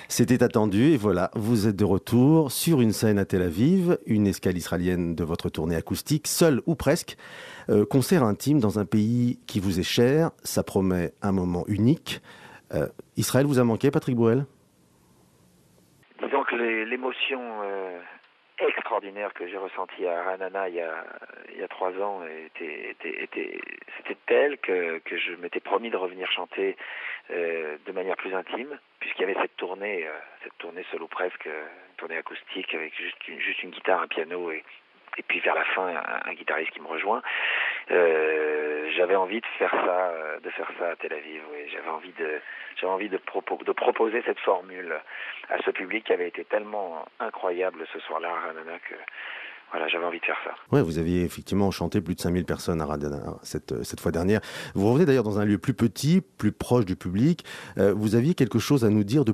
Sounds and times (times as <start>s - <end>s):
Speech: 0.0s - 14.5s, 16.2s - 59.3s.